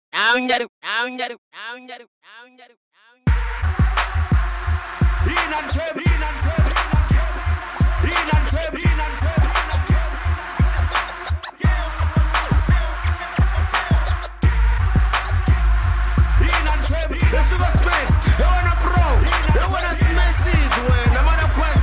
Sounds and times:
Rapping: 0.2s - 21.8s
Music: 3.3s - 21.8s.

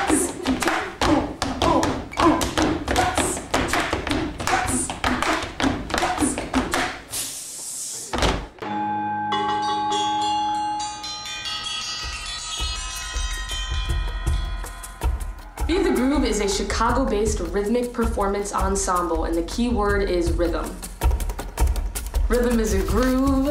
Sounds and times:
Music: 8.6s - 23.5s.

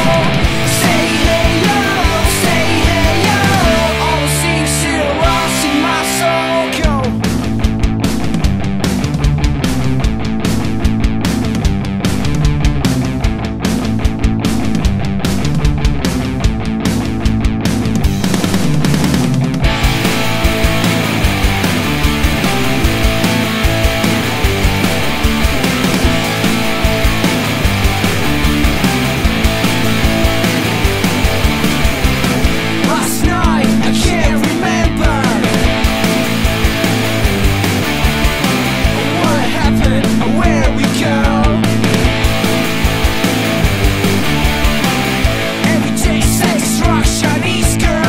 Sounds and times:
Singing: 0.0s - 7.2s, 32.8s - 35.6s, 39.0s - 41.6s, 45.6s - 48.0s
Grunge: 0.0s - 48.0s.

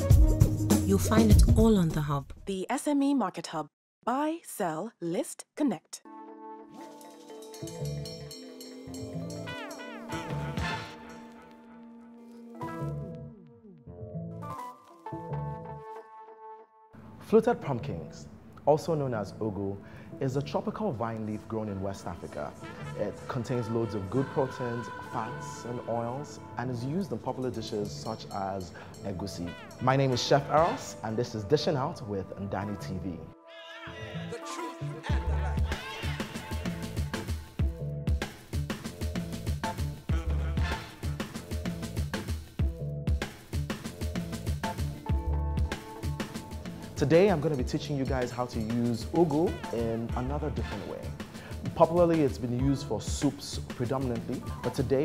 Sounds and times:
Music: 0.0s - 2.7s, 6.0s - 55.0s
Speech: 0.9s - 6.0s, 17.2s - 33.3s, 47.0s - 51.1s, 51.7s - 55.0s.

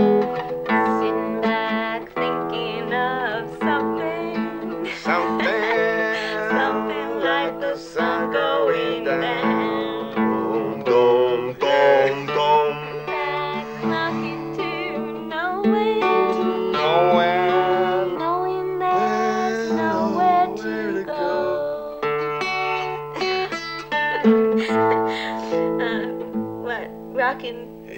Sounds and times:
Music: 0.0s - 27.9s
Speech: 18.9s - 21.2s, 25.8s - 27.9s.

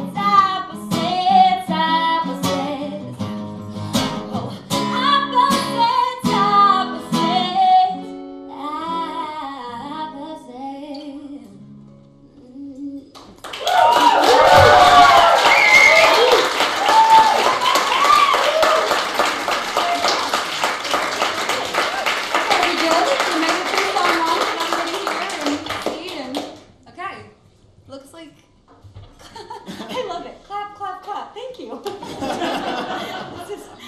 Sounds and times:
Clapping: 13.1s - 26.6s.

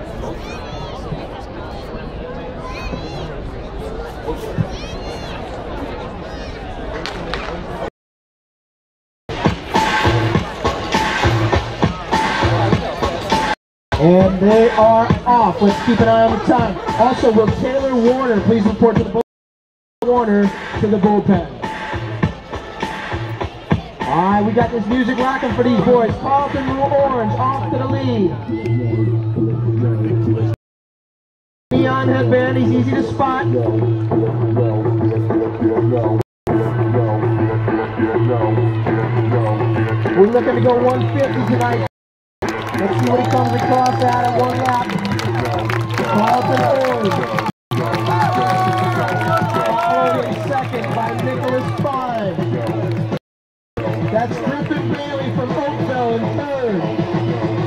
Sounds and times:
Outside, urban or manmade: 0.0s - 7.9s, 9.3s - 19.2s, 20.0s - 30.6s, 31.7s - 53.2s, 53.8s - 57.6s
Music: 9.3s - 19.2s, 20.1s - 30.6s, 31.7s - 53.2s, 53.8s - 57.6s.

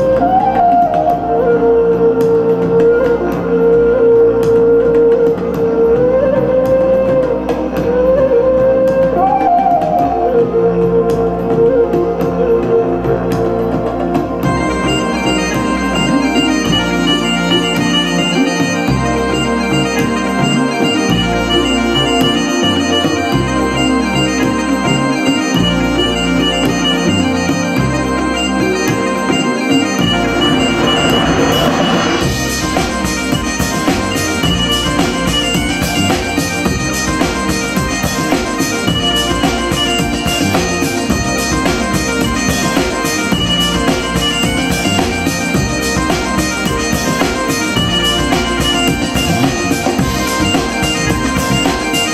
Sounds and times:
Electronic organ: 0.0s - 52.1s.

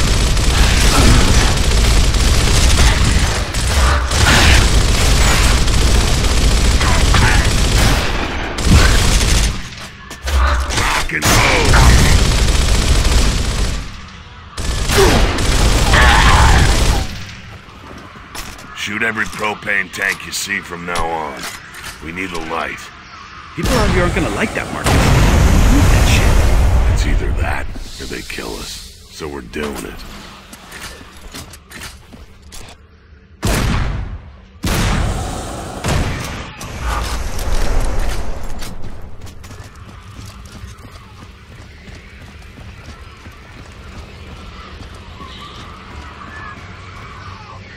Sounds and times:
Speech: 10.8s - 12.0s, 18.8s - 22.9s, 23.6s - 24.9s, 25.7s - 30.1s.

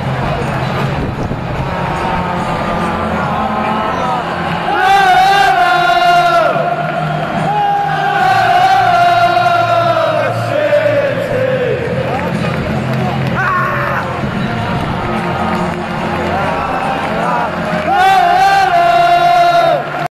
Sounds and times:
Music: 0.0s - 20.1s.

